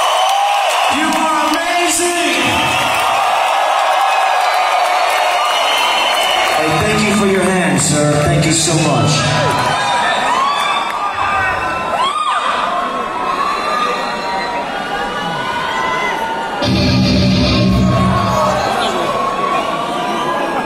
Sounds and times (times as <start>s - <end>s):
Inside, public space: 0.0s - 20.6s
Speech: 0.9s - 2.7s, 6.6s - 9.5s.